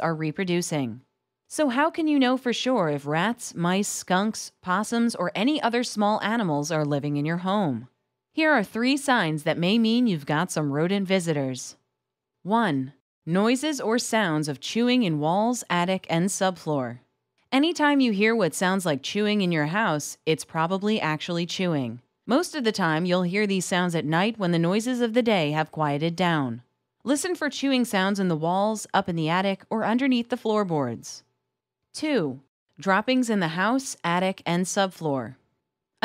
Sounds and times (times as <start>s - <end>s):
Speech: 0.0s - 11.8s, 12.5s - 17.0s, 17.6s - 31.2s, 32.0s - 35.4s.